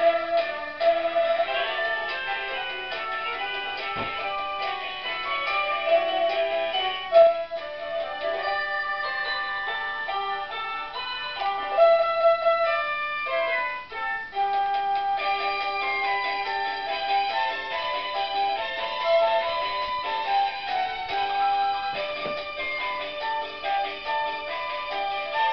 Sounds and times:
Christian music: 0.0s - 25.5s
Christmas music: 0.0s - 25.5s.

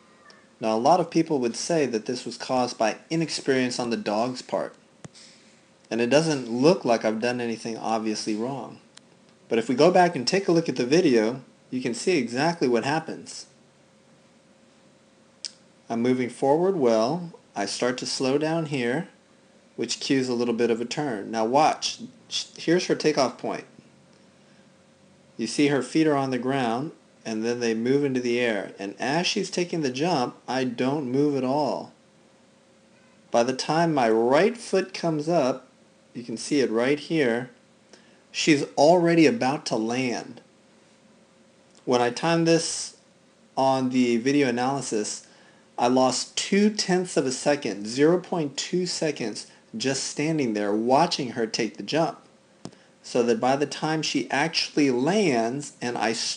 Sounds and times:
Speech: 0.6s - 4.8s, 5.9s - 8.9s, 9.5s - 13.6s, 15.9s - 19.2s, 19.8s - 23.8s, 25.4s - 32.0s, 33.4s - 37.6s, 38.4s - 40.5s, 41.8s - 43.0s, 43.6s - 52.3s, 53.1s - 56.3s.

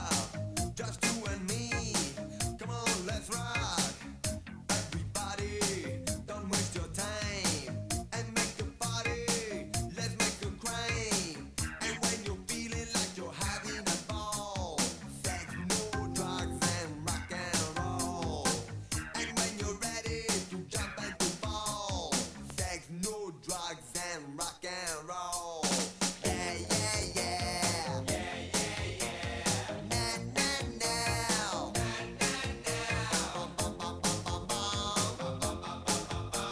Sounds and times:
Rock and roll: 0.0s - 36.5s.

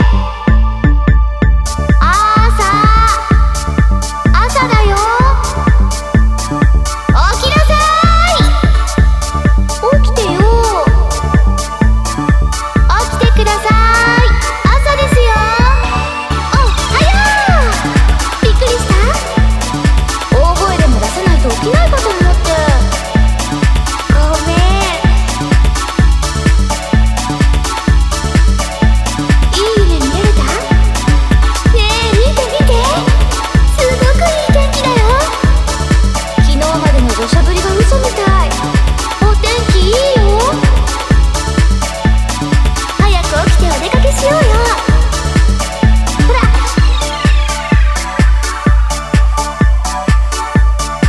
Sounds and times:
Techno: 0.0s - 51.0s
Speech: 2.0s - 3.4s, 4.3s - 5.6s, 7.1s - 8.7s, 9.8s - 11.1s, 12.9s - 19.4s, 20.3s - 23.0s, 24.1s - 25.3s, 29.5s - 30.8s, 31.7s - 35.6s, 36.4s - 40.8s, 43.0s - 45.1s, 46.2s - 46.9s.

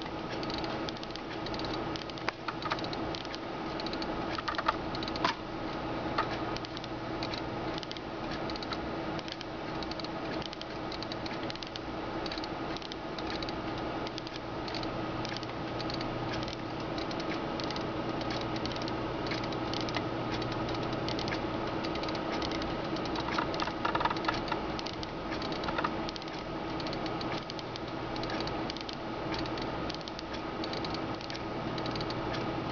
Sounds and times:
Tick-tock: 0.0s - 32.7s.

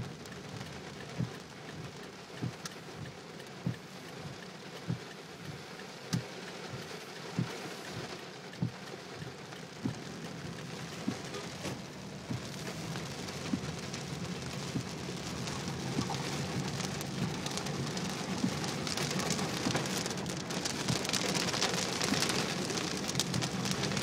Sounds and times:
Rain on surface: 0.0s - 24.0s.

